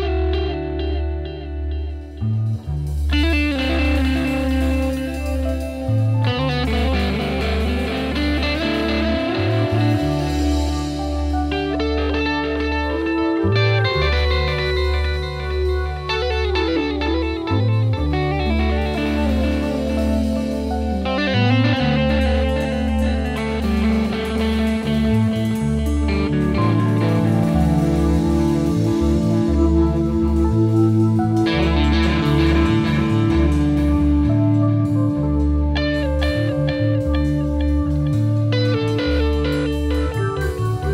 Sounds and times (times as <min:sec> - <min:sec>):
Music: 0:00.0 - 0:40.9.